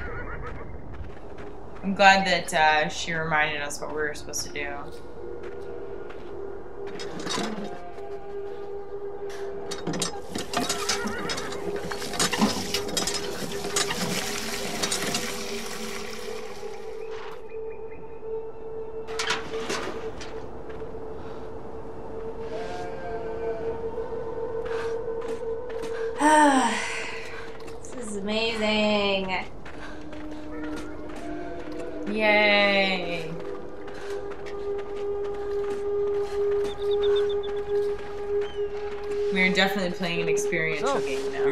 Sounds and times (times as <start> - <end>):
Outside, rural or natural: 0.0 - 41.5
Music: 1.0 - 41.5
Speech: 1.8 - 4.9, 28.0 - 29.5, 32.1 - 33.4, 39.4 - 41.5.